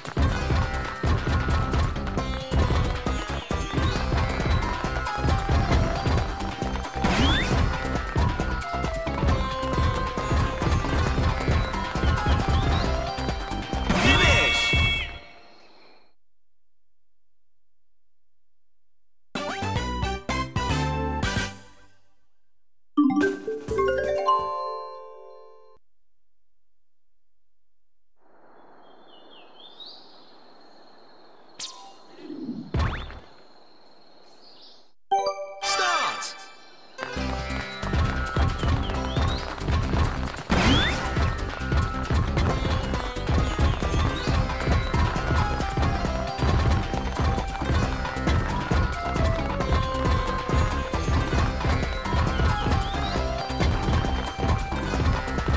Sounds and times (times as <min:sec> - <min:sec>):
Glockenspiel: 0:23.0 - 0:25.8.